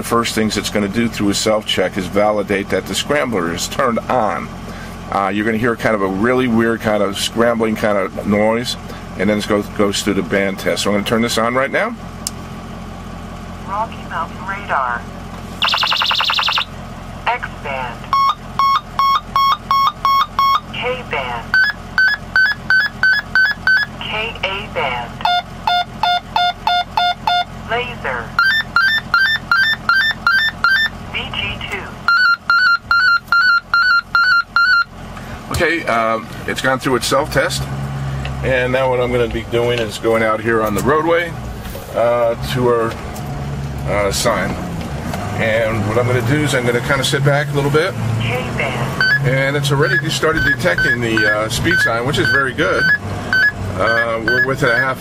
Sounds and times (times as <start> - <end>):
Outside, urban or manmade: 0.0 - 55.0.